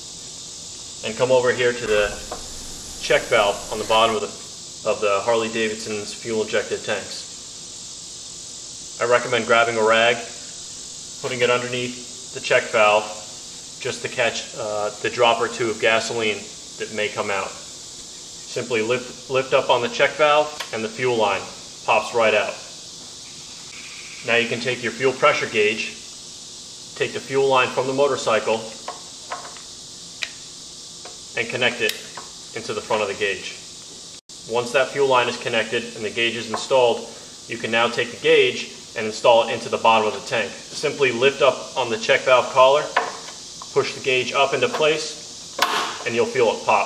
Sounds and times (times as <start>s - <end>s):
Speech: 1.0s - 2.3s, 3.0s - 7.3s, 9.0s - 10.4s, 11.2s - 17.6s, 18.5s - 22.7s, 24.3s - 26.0s, 27.0s - 28.8s, 31.4s - 33.7s, 34.5s - 43.0s, 43.7s - 45.2s, 46.0s - 46.8s.